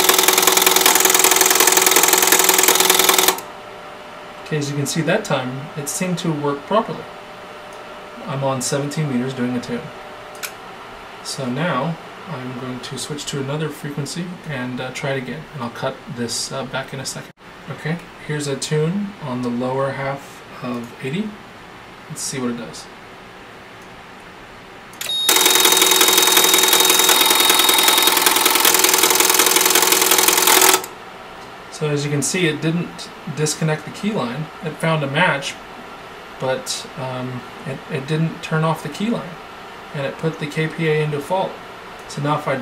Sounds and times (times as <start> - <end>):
Speech: 4.4 - 7.1, 8.2 - 10.0, 11.2 - 21.4, 22.1 - 23.0, 31.7 - 35.6, 36.4 - 42.6.